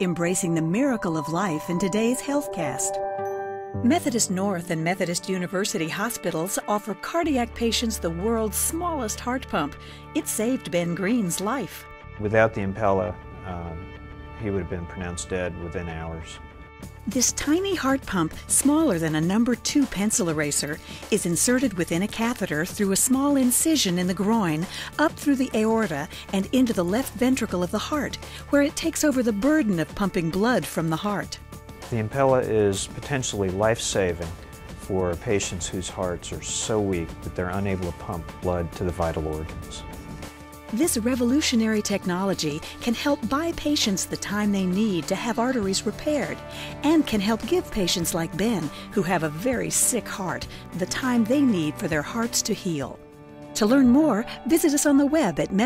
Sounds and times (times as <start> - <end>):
Speech: 0.0 - 3.0, 3.9 - 13.8, 14.4 - 16.4, 17.1 - 39.9, 40.8 - 53.0
Music: 0.0 - 55.6.